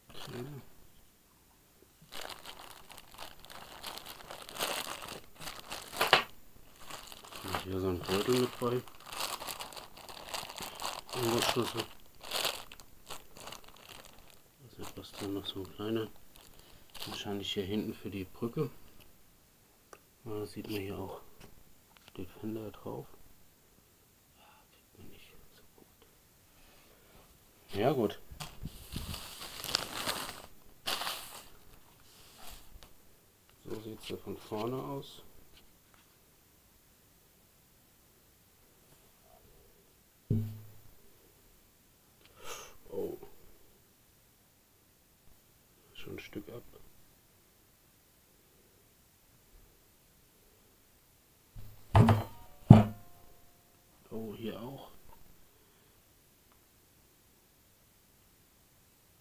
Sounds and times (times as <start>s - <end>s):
Speech: 0.1s - 0.7s, 7.4s - 8.9s, 11.1s - 11.9s, 14.6s - 16.2s, 17.0s - 18.8s, 20.2s - 21.3s, 22.1s - 23.2s, 24.9s - 25.7s, 27.7s - 28.2s, 33.6s - 35.3s, 42.9s - 43.3s, 45.9s - 46.9s, 54.0s - 55.0s.